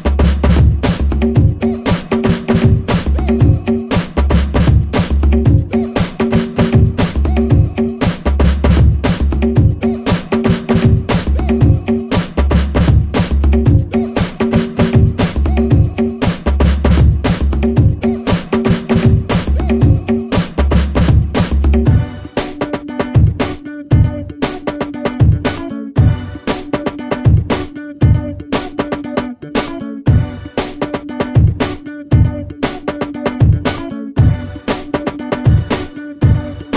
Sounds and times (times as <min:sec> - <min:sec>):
Disco: 0:00.0 - 0:36.7.